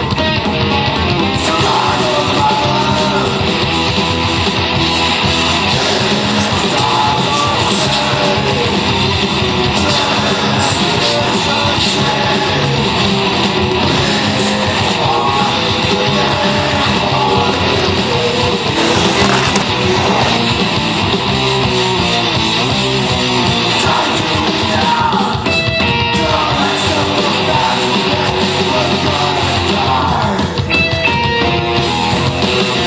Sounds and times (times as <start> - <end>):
Music: 0.0 - 32.8
Outside, urban or manmade: 0.0 - 32.8.